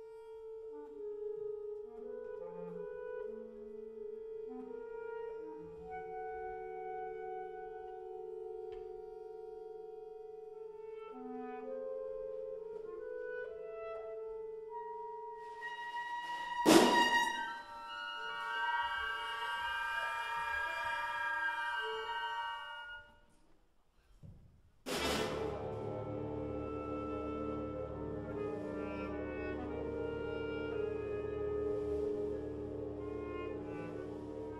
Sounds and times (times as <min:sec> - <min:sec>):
Orchestra: 0:00.0 - 0:23.3, 0:24.8 - 0:34.5
Classical music: 0:00.0 - 0:23.4, 0:24.9 - 0:34.5.